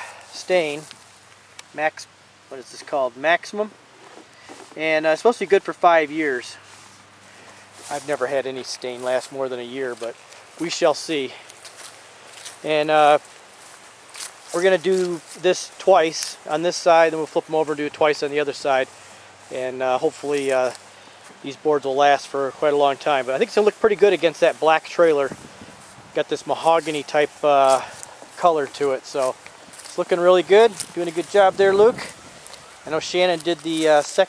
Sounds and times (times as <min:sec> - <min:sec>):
Speech: 0:00.0 - 0:00.9, 0:01.7 - 0:03.7, 0:04.8 - 0:06.6, 0:07.8 - 0:11.4, 0:12.6 - 0:13.2, 0:14.5 - 0:18.9, 0:19.5 - 0:20.8, 0:21.4 - 0:25.4, 0:26.1 - 0:32.1, 0:32.9 - 0:34.2
Outside, rural or natural: 0:00.0 - 0:34.2.